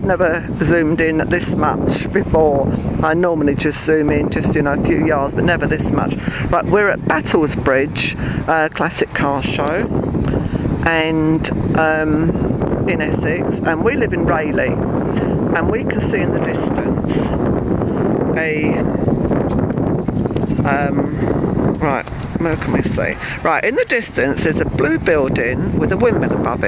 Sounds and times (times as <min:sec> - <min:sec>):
Speech: 0:00.0 - 0:09.9, 0:10.8 - 0:14.8, 0:15.5 - 0:17.4, 0:18.4 - 0:18.9, 0:20.6 - 0:21.2, 0:21.8 - 0:26.6.